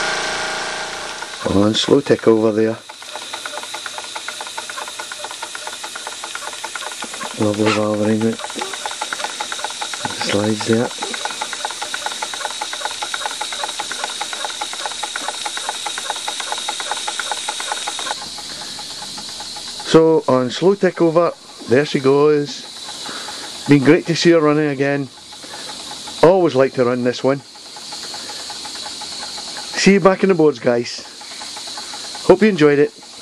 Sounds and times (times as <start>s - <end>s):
Engine: 0.0s - 33.2s
Speech: 1.4s - 2.8s, 7.4s - 8.4s, 10.1s - 11.0s, 19.9s - 22.6s, 26.2s - 27.4s, 29.8s - 31.0s, 32.3s - 32.9s.